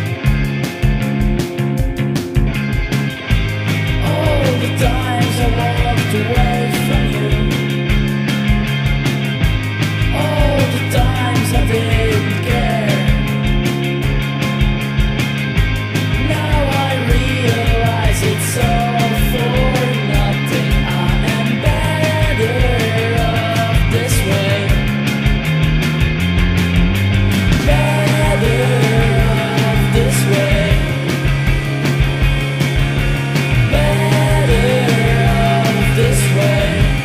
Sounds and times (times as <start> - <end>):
Music: 0.0 - 37.0.